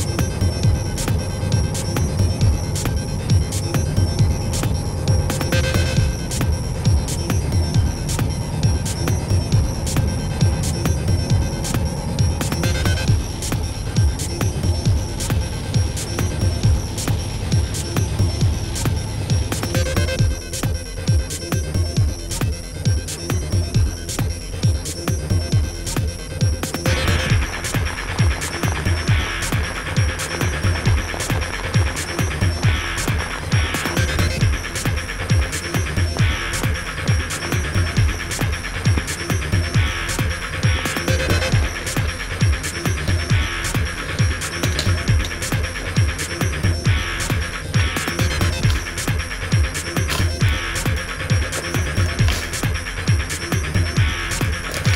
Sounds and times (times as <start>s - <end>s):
Music: 0.0s - 54.9s
Rain on surface: 27.2s - 38.8s.